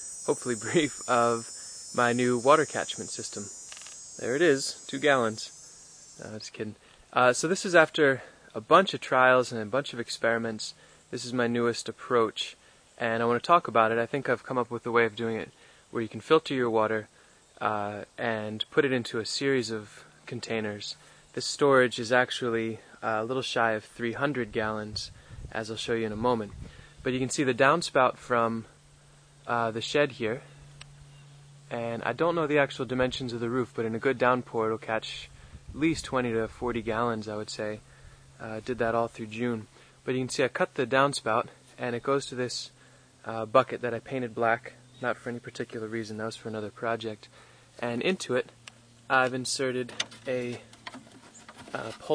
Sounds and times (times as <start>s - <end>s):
Speech: 0.3s - 3.5s, 4.2s - 5.5s, 6.2s - 28.7s, 29.5s - 30.5s, 31.7s - 37.8s, 38.4s - 48.5s, 49.1s - 50.7s, 51.7s - 52.1s.